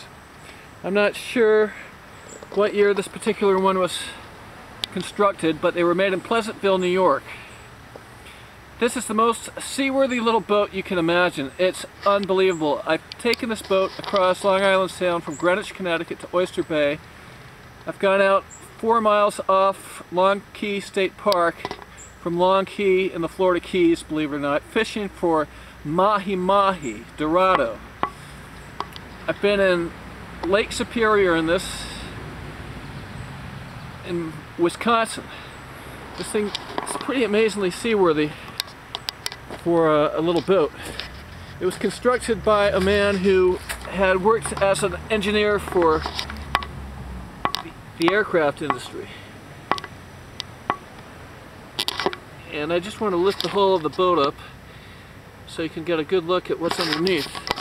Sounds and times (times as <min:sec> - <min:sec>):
Speech: 0:00.8 - 0:01.8, 0:02.5 - 0:04.2, 0:04.9 - 0:07.4, 0:08.8 - 0:17.0, 0:17.9 - 0:27.8, 0:29.3 - 0:32.1, 0:34.1 - 0:35.3, 0:36.2 - 0:38.4, 0:39.6 - 0:40.8, 0:41.6 - 0:46.1, 0:48.0 - 0:49.2, 0:52.4 - 0:54.5, 0:55.5 - 0:57.4.